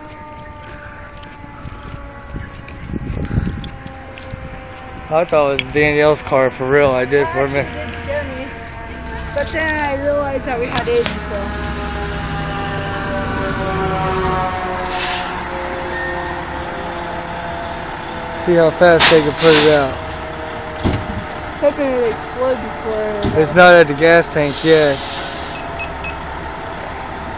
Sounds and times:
Vehicle: 0.0 - 27.3
Speech: 18.4 - 20.0.

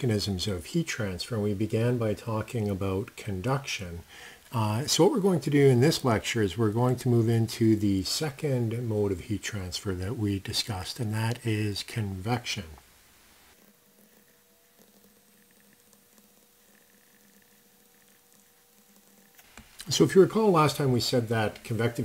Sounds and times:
Speech: 0.0 - 12.8, 19.8 - 22.0.

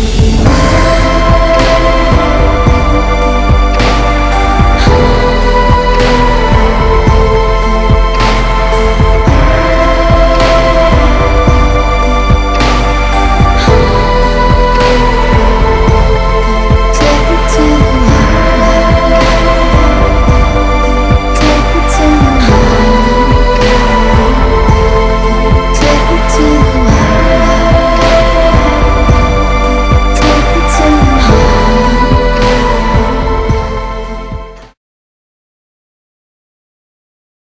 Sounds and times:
Music: 0.0 - 34.8.

